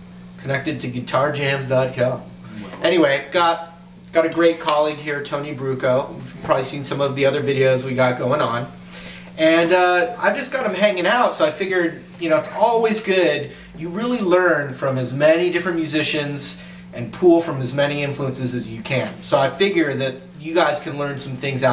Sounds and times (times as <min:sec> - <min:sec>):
Speech: 0:00.4 - 0:08.8, 0:09.4 - 0:21.7.